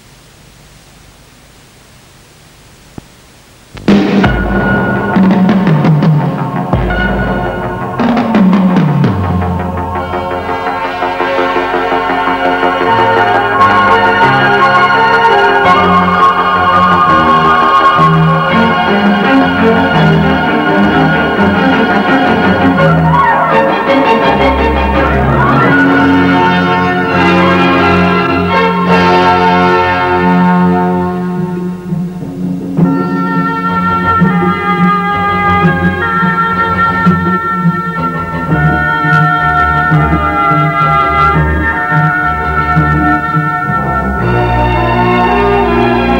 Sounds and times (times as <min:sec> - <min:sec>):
Background music: 0:03.8 - 0:46.1.